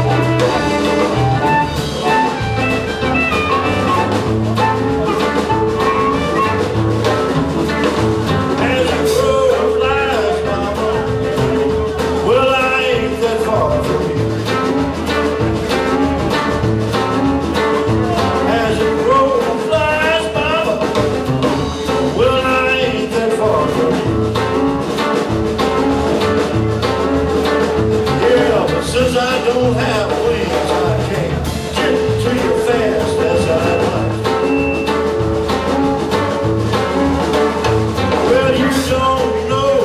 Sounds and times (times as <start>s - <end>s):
Music: 0.0s - 39.8s.